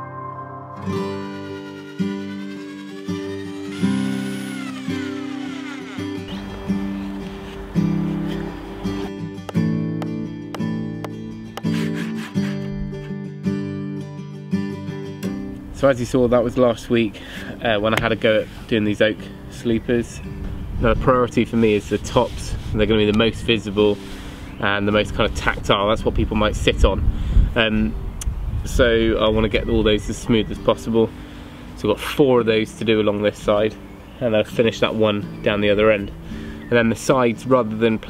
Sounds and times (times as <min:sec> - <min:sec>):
Music: 0:00.0 - 0:21.8, 0:29.0 - 0:38.0
Speech: 0:15.8 - 0:20.2, 0:20.8 - 0:24.0, 0:24.6 - 0:27.0, 0:28.7 - 0:31.1, 0:31.8 - 0:36.1, 0:36.7 - 0:38.0.